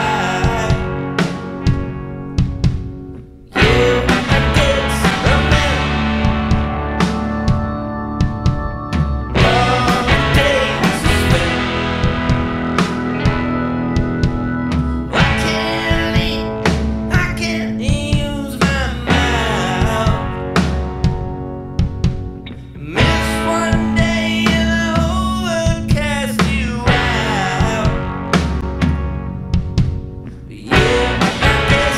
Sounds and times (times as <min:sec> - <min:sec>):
Music: 0:00.0 - 0:31.9.